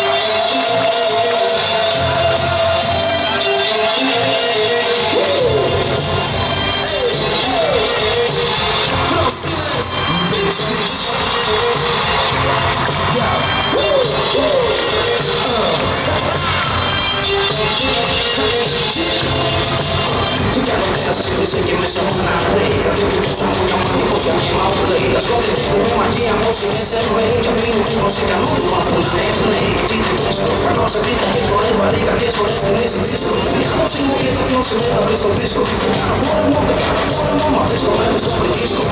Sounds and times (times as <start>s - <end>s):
Music: 0.0s - 38.9s.